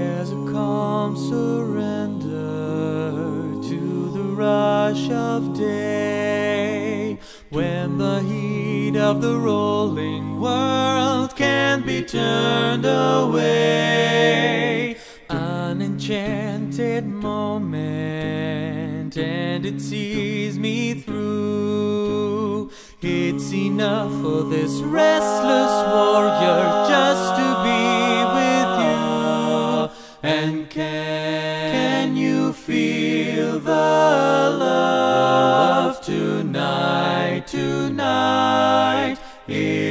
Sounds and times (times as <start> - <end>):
A capella: 0.0 - 39.9.